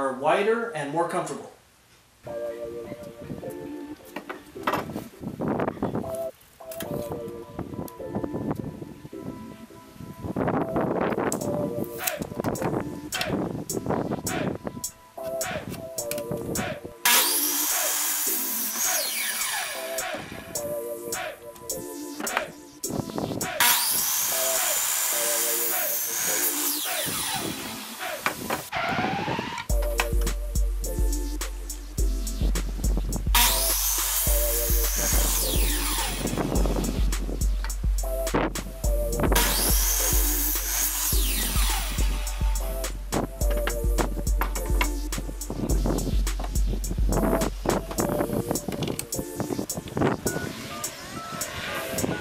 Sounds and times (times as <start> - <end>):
Sawing: 16.6 - 20.4, 23.4 - 29.7, 33.4 - 36.6, 39.4 - 42.6.